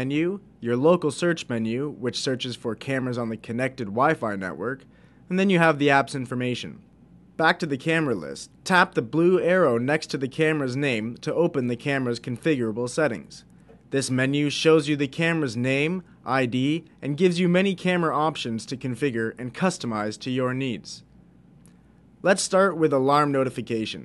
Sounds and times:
Speech: 0.0 - 21.1, 22.2 - 24.0.

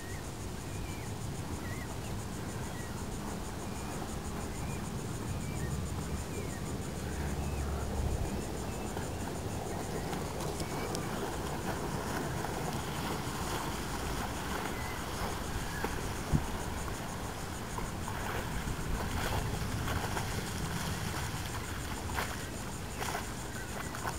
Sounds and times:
Motorboat, speedboat: 0.0 - 24.1
Outside, rural or natural: 0.0 - 24.1.

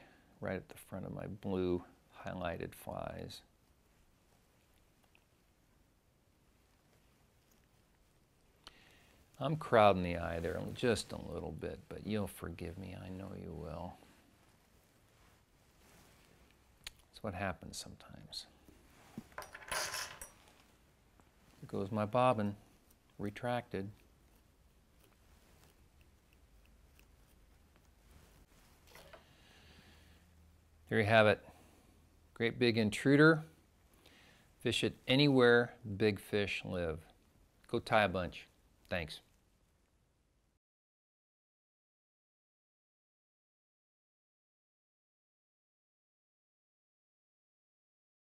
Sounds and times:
Speech: 0.4 - 3.5, 9.4 - 14.0, 17.1 - 18.6, 21.6 - 22.6, 23.2 - 24.0, 30.9 - 31.5, 32.4 - 33.5, 34.6 - 39.3.

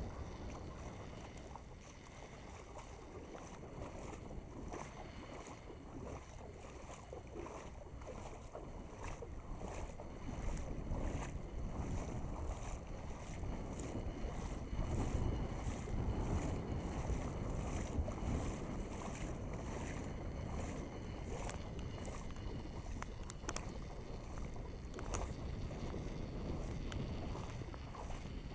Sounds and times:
Stream: 0.0 - 28.5.

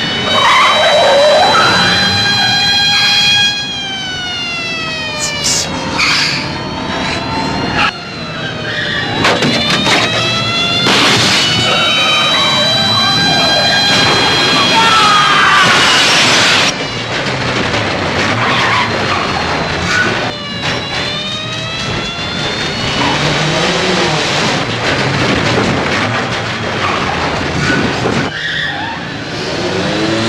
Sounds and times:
Car: 5.5 - 30.2.

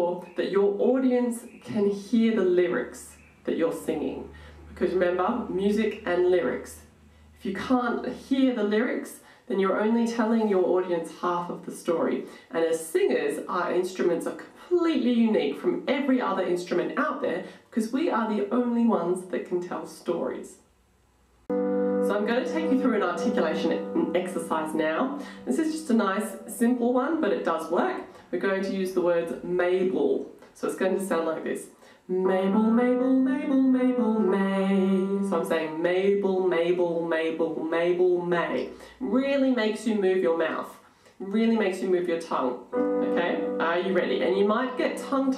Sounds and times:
Speech: 0.0 - 20.7, 22.1 - 32.6, 33.4 - 45.3.

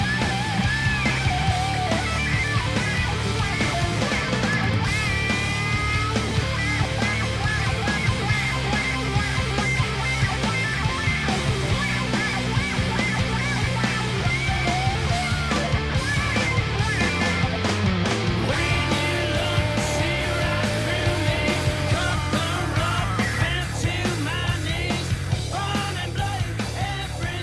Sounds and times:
Electric guitar: 0.0 - 27.4.

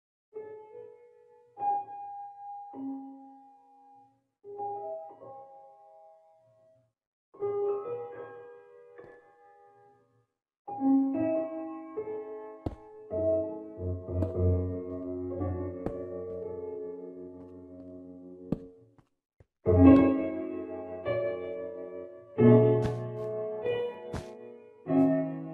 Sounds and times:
Music: 0.3 - 19.0, 19.6 - 25.5.

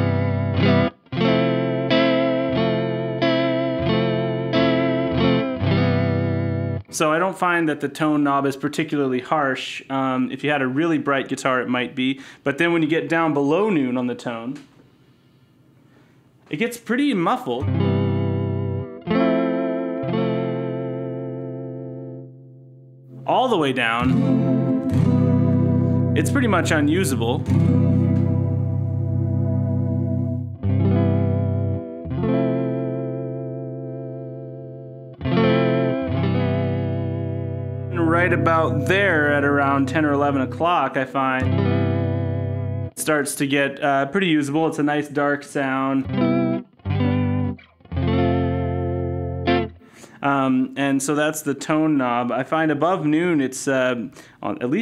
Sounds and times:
Electric guitar: 0.0 - 6.9, 17.6 - 23.3, 24.0 - 43.0, 45.8 - 50.2
Speech: 6.9 - 14.7, 16.5 - 17.7, 23.2 - 24.1, 26.2 - 27.6, 37.9 - 41.5, 43.0 - 46.1, 50.2 - 54.8.

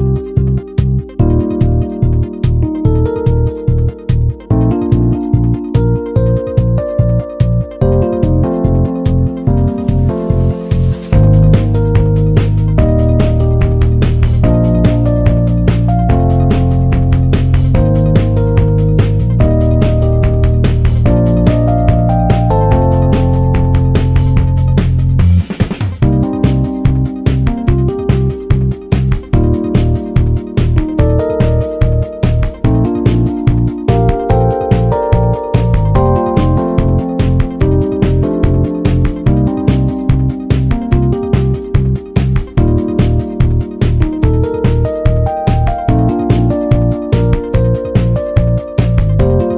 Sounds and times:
Music: 0.0 - 49.5.

